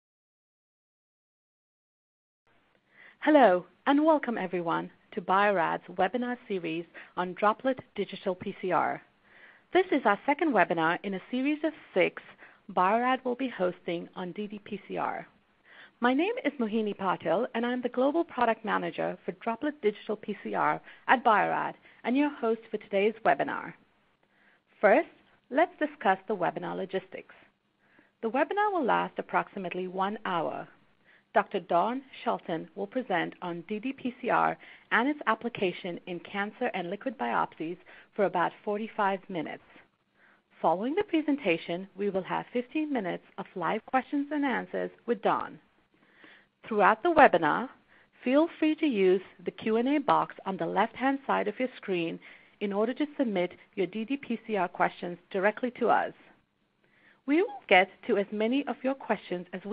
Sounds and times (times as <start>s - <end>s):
Speech: 3.2s - 9.1s, 9.7s - 15.3s, 16.0s - 23.8s, 24.8s - 27.5s, 28.2s - 39.8s, 40.6s - 45.6s, 46.6s - 56.3s, 57.3s - 59.7s.